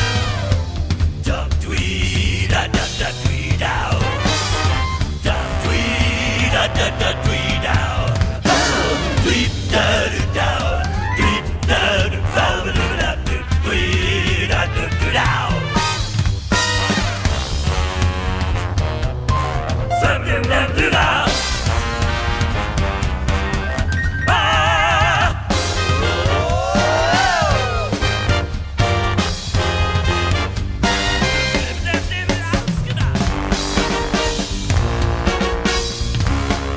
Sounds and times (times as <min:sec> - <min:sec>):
Music: 0:00.0 - 0:36.7.